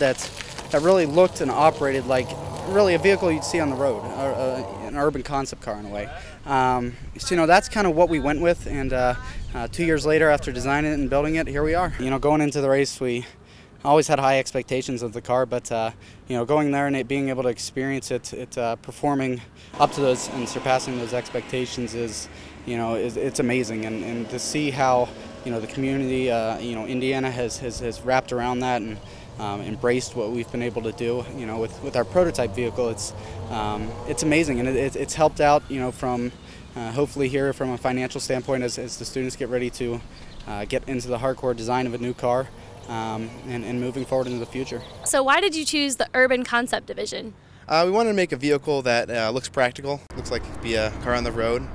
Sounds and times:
Car passing by: 0:00.0 - 0:06.3, 0:19.7 - 0:39.3
Speech: 0:00.0 - 0:51.7.

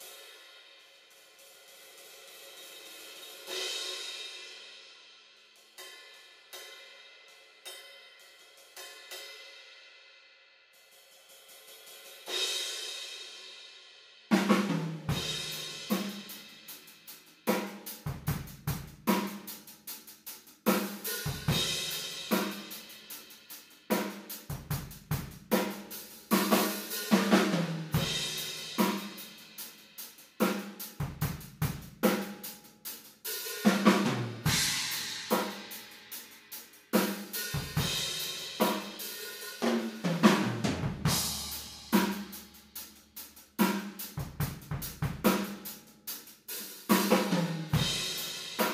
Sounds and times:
Drum kit: 0:01.3 - 0:04.6, 0:11.3 - 0:13.5, 0:14.3 - 0:48.7
Snare drum: 0:14.3 - 0:16.4, 0:23.9 - 0:29.4, 0:33.5 - 0:35.8, 0:37.0 - 0:42.6, 0:43.6 - 0:45.7, 0:46.8 - 0:48.7.

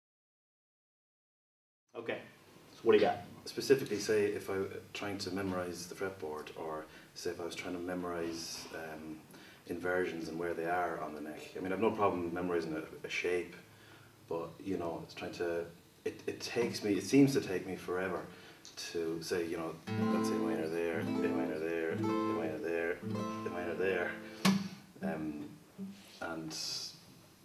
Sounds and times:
Speech: 0:02.0 - 0:13.6, 0:14.3 - 0:24.2, 0:25.0 - 0:25.5, 0:26.2 - 0:27.0
Strum: 0:19.9 - 0:26.1.

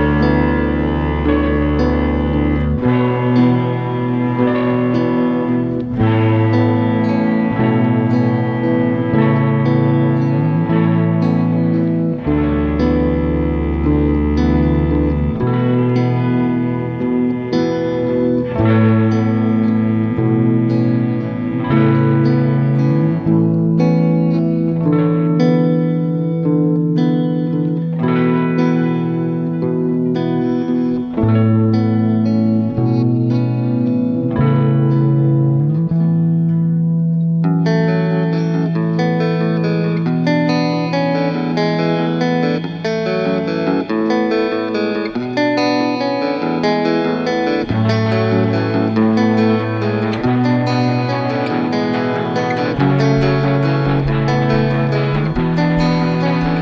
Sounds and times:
Music: 0:00.0 - 0:56.6.

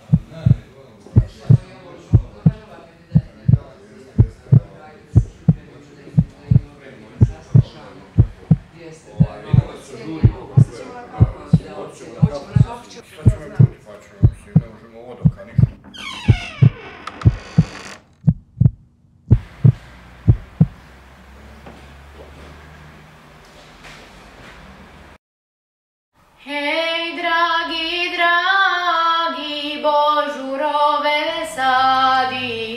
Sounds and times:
Heart sounds, heartbeat: 0:00.0 - 0:00.6, 0:01.2 - 0:01.6, 0:02.2 - 0:02.6, 0:03.2 - 0:03.6, 0:06.2 - 0:08.7, 0:15.3 - 0:15.7, 0:18.3 - 0:20.8.

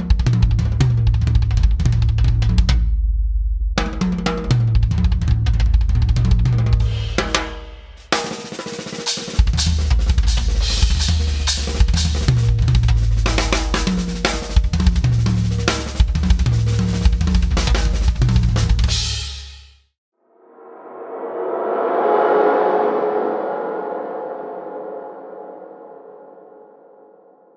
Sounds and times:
Drum kit: 0:00.0 - 0:03.0, 0:03.6 - 0:19.8
Bass drum: 0:00.0 - 0:08.1, 0:09.4 - 0:19.3.

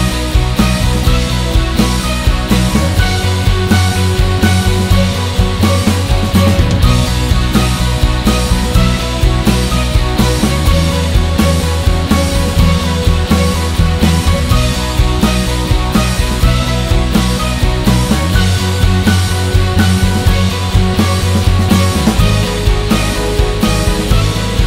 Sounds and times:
Background music: 0:00.0 - 0:24.6.

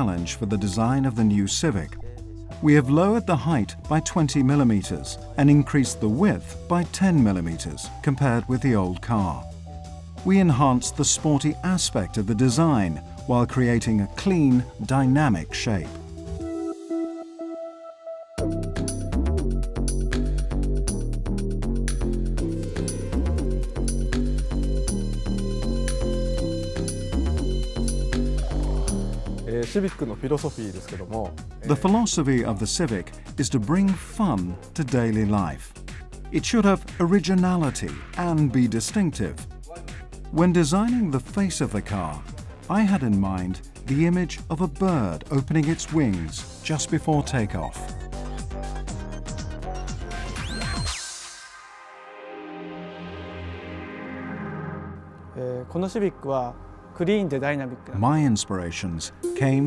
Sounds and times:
Speech: 0:00.0 - 0:09.5, 0:10.2 - 0:16.0, 0:29.5 - 0:35.7, 0:36.3 - 0:47.9, 0:55.4 - 0:59.6
Music: 0:00.0 - 0:59.6.

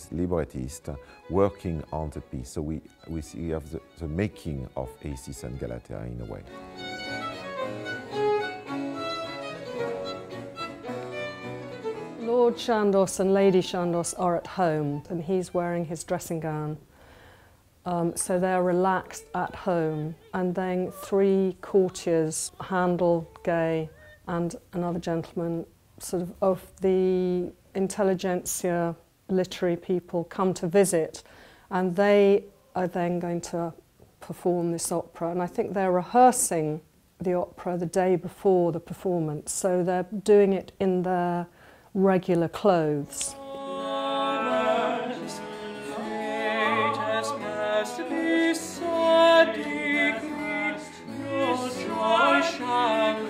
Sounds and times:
Violin, fiddle: 0:00.0 - 0:16.1, 0:43.1 - 0:53.2.

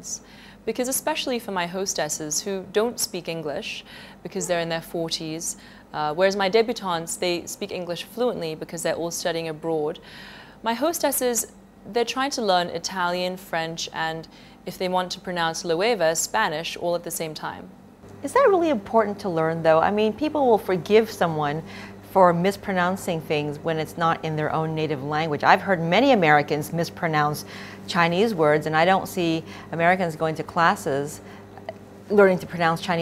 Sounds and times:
Speech: 0:00.0 - 0:10.0, 0:10.7 - 0:31.2, 0:32.1 - 0:33.0.

